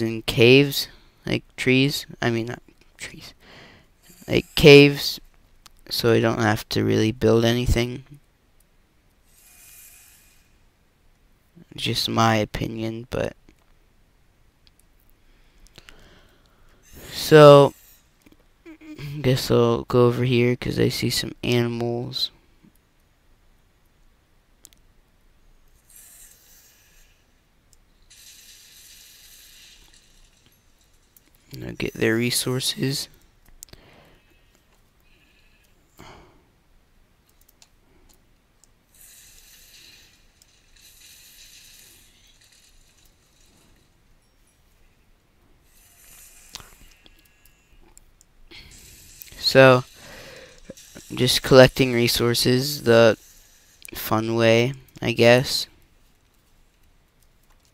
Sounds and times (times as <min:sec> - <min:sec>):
Speech: 0:00.0 - 0:03.4, 0:04.3 - 0:05.2, 0:05.9 - 0:08.2, 0:11.6 - 0:13.4, 0:17.0 - 0:17.7, 0:18.7 - 0:22.3, 0:31.6 - 0:33.1, 0:49.4 - 0:49.9, 0:51.1 - 0:53.2, 0:53.9 - 0:55.7.